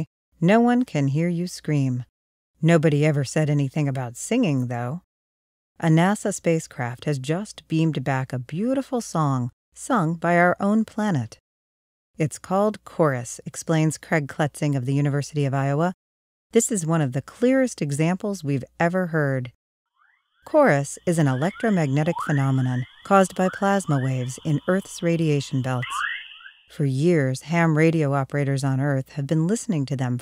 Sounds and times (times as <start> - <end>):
Speech: 0.0 - 5.0, 5.8 - 11.4, 12.2 - 16.0, 16.6 - 19.6, 20.5 - 26.0, 26.7 - 30.2.